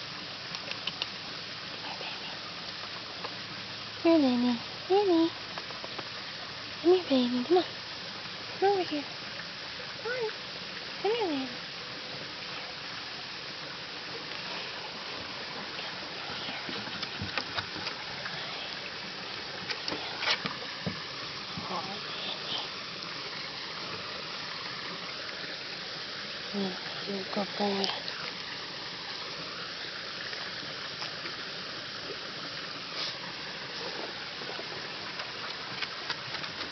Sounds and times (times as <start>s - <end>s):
Speech: 4.0s - 5.4s, 6.8s - 7.7s, 8.6s - 9.1s, 11.0s - 11.6s, 21.6s - 22.7s, 26.5s - 28.0s.